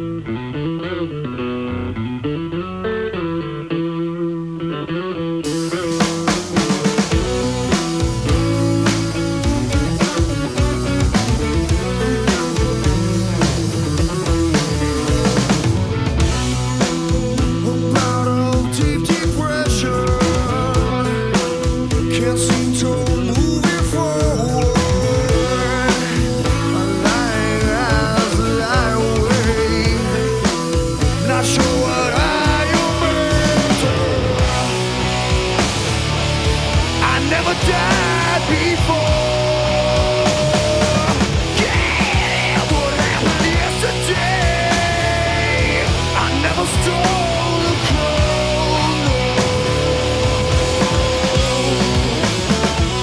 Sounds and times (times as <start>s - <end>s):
Music: 0.0s - 53.0s.